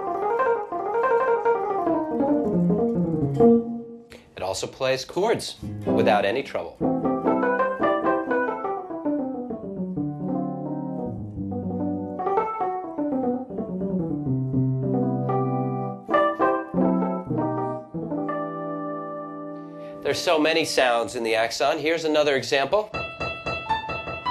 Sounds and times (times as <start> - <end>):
Guitar: 0.0 - 4.4, 5.5 - 13.2.